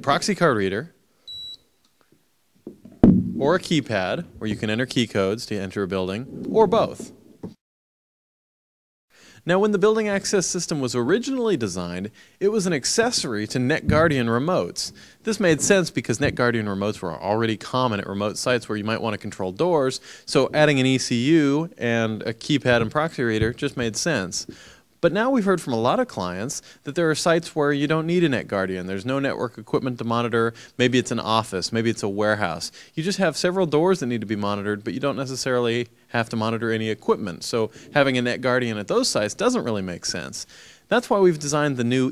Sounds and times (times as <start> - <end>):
Speech: 0.0 - 1.0, 3.4 - 7.2, 9.4 - 42.1.